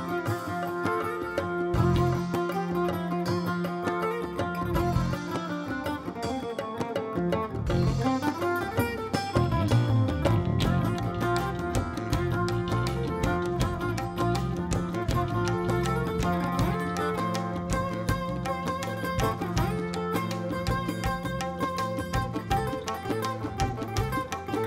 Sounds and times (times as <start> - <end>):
Music: 0.0 - 24.6.